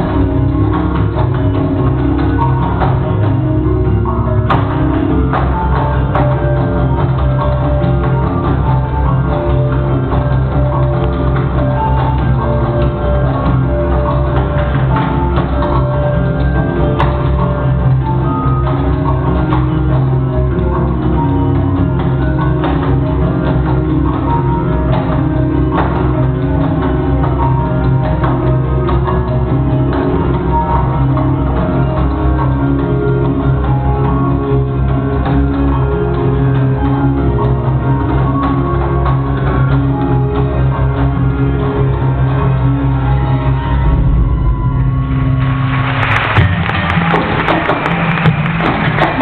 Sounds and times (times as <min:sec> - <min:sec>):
Music: 0:00.0 - 0:49.2.